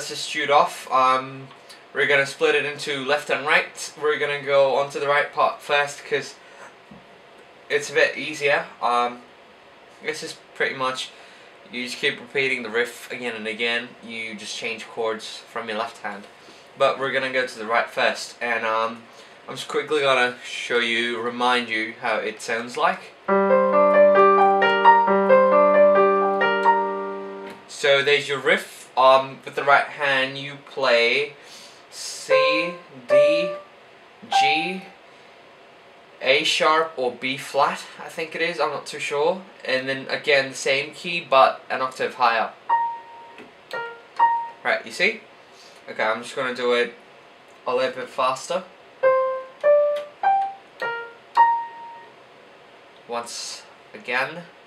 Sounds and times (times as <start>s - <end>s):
Speech: 0.0s - 6.4s, 7.7s - 9.3s, 10.0s - 23.2s, 27.7s - 33.6s, 34.2s - 34.9s, 36.2s - 42.6s, 44.6s - 47.0s, 47.6s - 48.7s, 53.0s - 54.6s
Music: 23.3s - 27.6s, 32.3s - 33.7s, 34.3s - 35.0s, 42.7s - 44.6s, 49.0s - 52.1s.